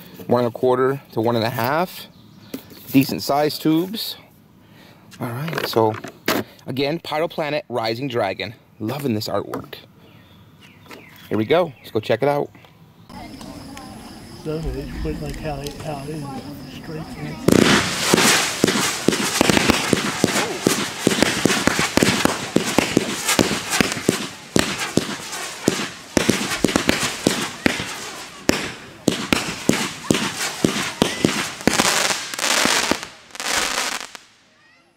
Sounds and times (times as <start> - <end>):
Fireworks: 13.1 - 34.6.